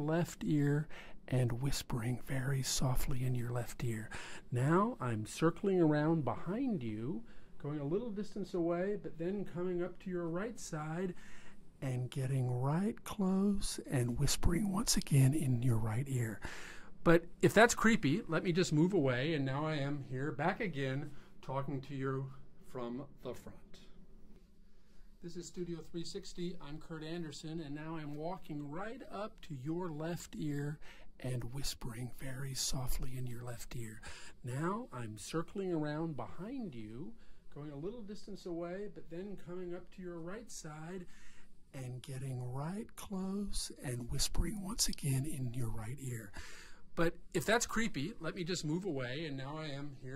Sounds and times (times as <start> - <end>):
Speech: 0.0 - 11.2, 11.8 - 23.9, 25.2 - 41.1, 41.7 - 46.4, 47.0 - 50.1.